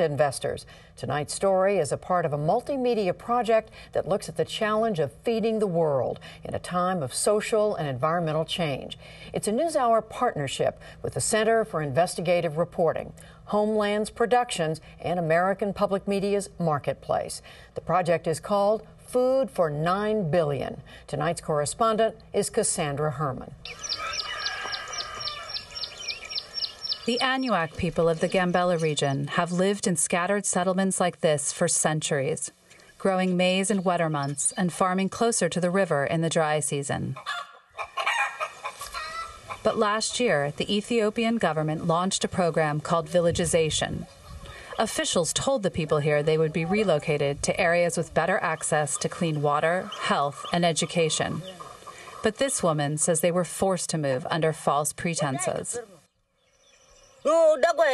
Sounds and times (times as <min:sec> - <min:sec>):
Speech: 0:00.0 - 0:23.6, 0:27.1 - 0:37.2, 0:39.7 - 0:44.0, 0:44.8 - 0:51.6, 0:52.3 - 0:56.0, 0:57.3 - 0:57.9.